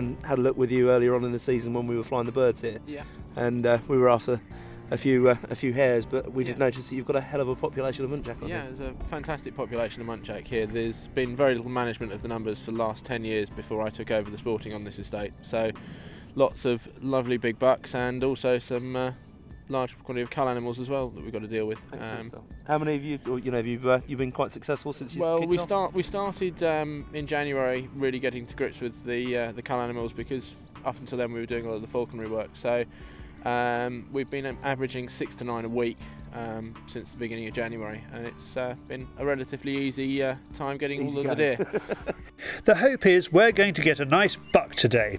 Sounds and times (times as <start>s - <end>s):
Speech: 0.0s - 15.8s, 16.4s - 32.9s, 33.5s - 41.6s, 42.6s - 45.1s.